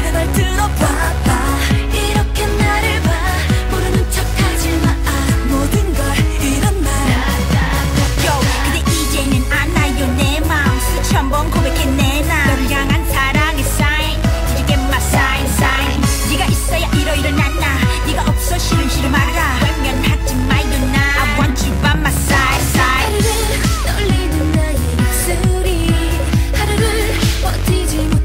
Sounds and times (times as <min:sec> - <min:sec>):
Exciting music: 0:00.0 - 0:28.2
Pop music: 0:00.0 - 0:28.2.